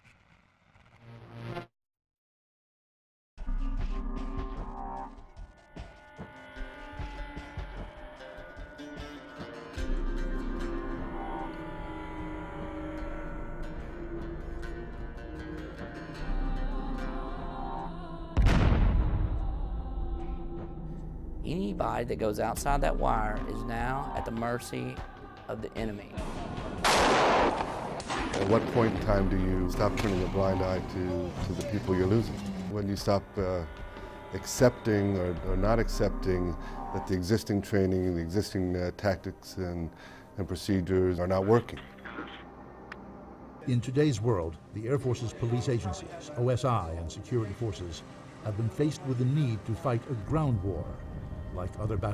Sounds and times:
Music: 3.4 - 52.1
Speech: 21.5 - 26.2, 28.4 - 33.7, 34.4 - 41.8, 43.6 - 52.1.

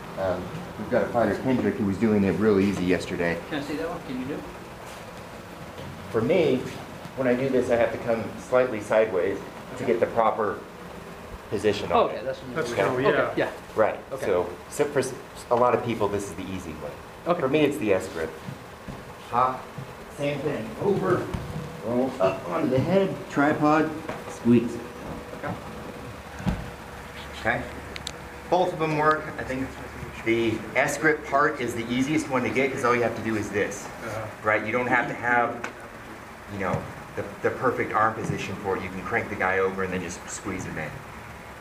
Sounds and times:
Speech: 0.2 - 4.6, 6.1 - 10.7, 11.5 - 18.4, 19.3 - 25.6, 27.4 - 27.7, 28.5 - 35.7, 36.5 - 41.0
Inside, large room or hall: 15.0 - 27.9.

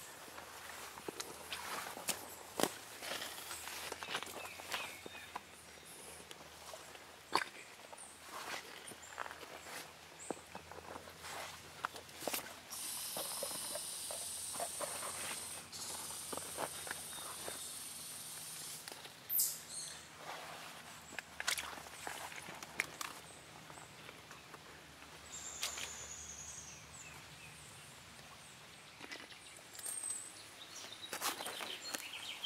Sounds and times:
Bird vocalization, bird call, bird song: 3.6 - 6.2, 19.3 - 20.1, 25.2 - 32.4.

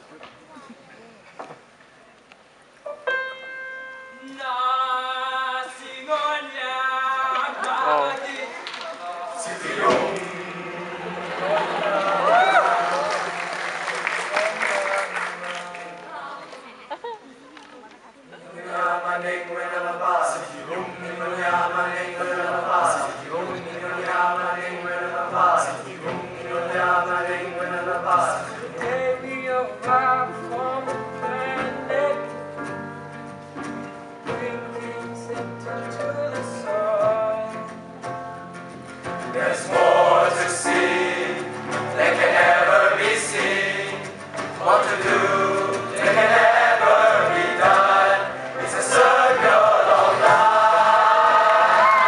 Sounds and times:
Music: 2.8 - 7.5, 9.4 - 11.4, 18.6 - 52.0
Male singing: 4.2 - 8.2, 9.0 - 11.0, 18.6 - 32.4, 34.3 - 37.8.

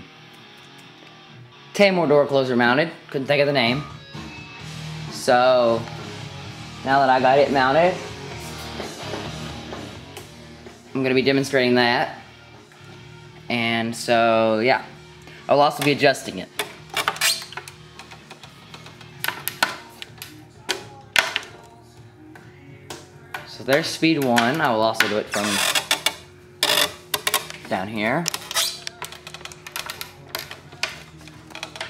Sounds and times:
Music: 0.0 - 31.9
Speech: 1.8 - 3.9, 6.9 - 8.0, 11.0 - 12.2, 13.5 - 14.9, 15.5 - 16.5, 23.5 - 25.6, 27.7 - 28.3.

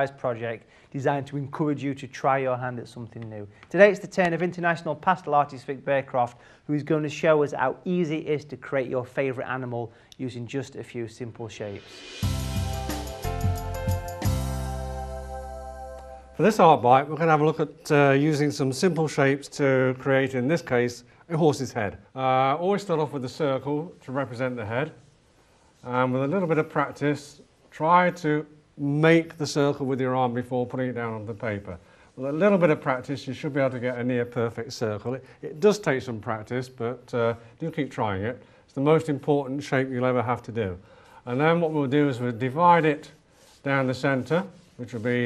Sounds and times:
Speech: 0.0 - 11.9, 16.4 - 25.0, 25.8 - 45.2.

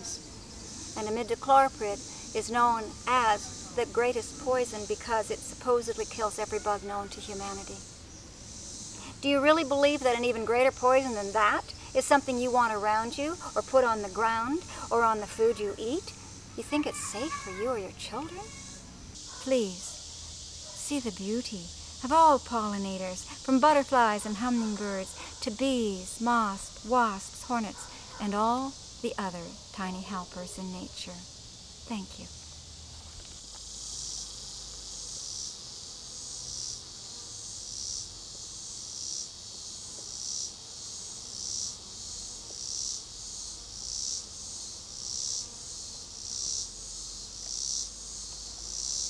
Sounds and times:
Bee, wasp, etc.: 0.0 - 49.0
Cricket: 0.0 - 49.0
Fly, housefly: 0.0 - 49.0.

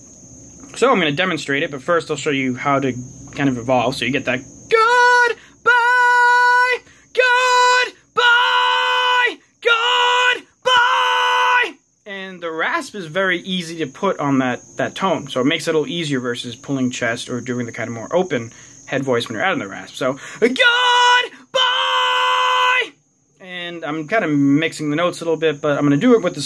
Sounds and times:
Male speech, man speaking: 0.7 - 5.4, 12.1 - 21.3, 22.8 - 26.4.

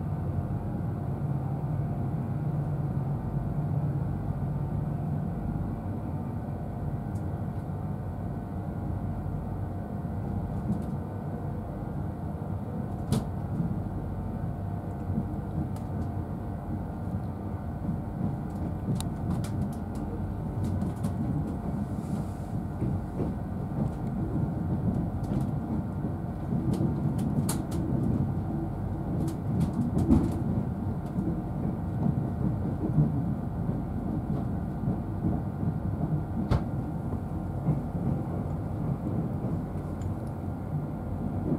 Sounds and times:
Railroad car, train wagon: 0.0 - 41.5
Train: 0.0 - 41.5.

